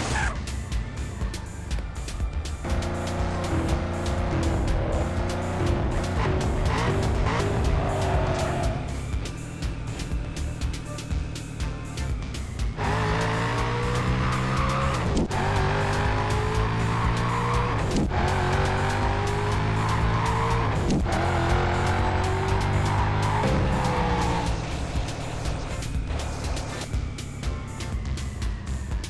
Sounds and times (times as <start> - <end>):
Music: 0.0 - 29.1.